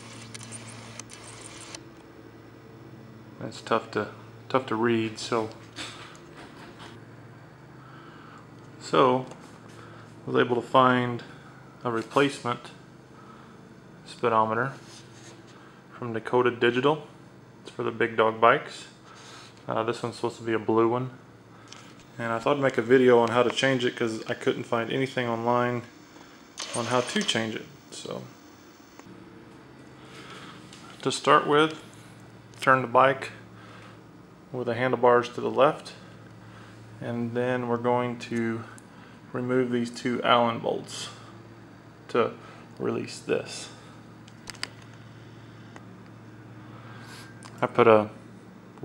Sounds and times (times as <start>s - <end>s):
Speech: 3.4s - 5.6s, 8.8s - 9.4s, 10.2s - 12.8s, 14.0s - 14.8s, 16.0s - 17.1s, 17.7s - 19.0s, 19.7s - 21.2s, 22.2s - 25.9s, 26.6s - 28.3s, 31.0s - 31.8s, 32.6s - 33.4s, 34.5s - 36.1s, 37.0s - 41.3s, 42.1s - 43.8s, 47.6s - 48.2s.